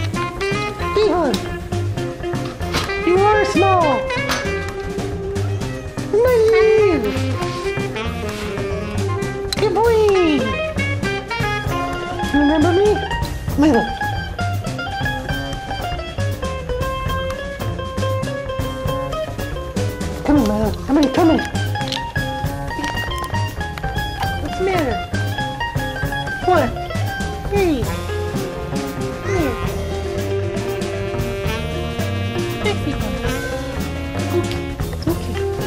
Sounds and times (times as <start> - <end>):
Music: 0.0 - 35.6
Speech: 0.9 - 1.4, 3.0 - 4.1, 9.6 - 10.6, 12.3 - 14.0, 20.2 - 21.5, 24.4 - 25.1, 26.4 - 26.8, 27.5 - 28.0, 29.2 - 29.7, 32.6 - 33.5.